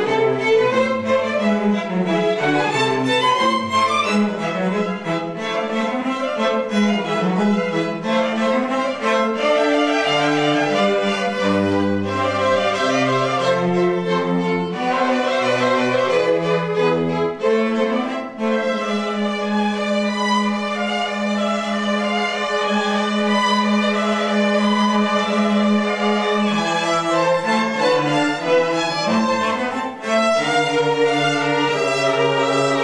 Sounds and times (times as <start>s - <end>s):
Violin, fiddle: 0.0s - 32.8s.